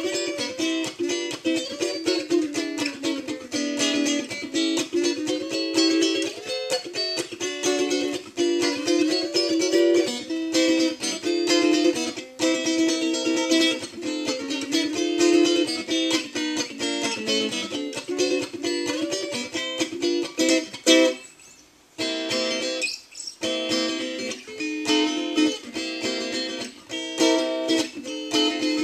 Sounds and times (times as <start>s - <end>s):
Acoustic guitar: 0.0s - 28.8s.